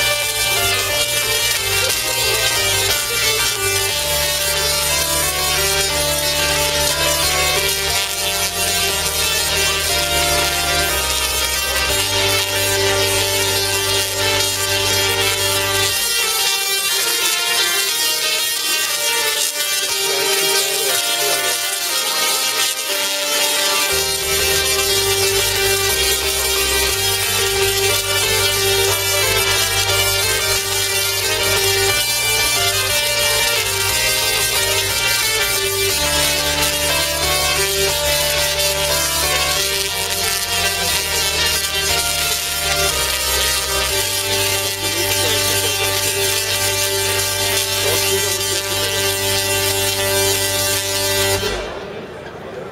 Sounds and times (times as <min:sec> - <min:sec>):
Electronica: 0:00.0 - 0:52.3
Speech: 0:19.8 - 0:22.0, 0:44.8 - 0:46.6, 0:47.8 - 0:49.2, 0:51.7 - 0:52.7.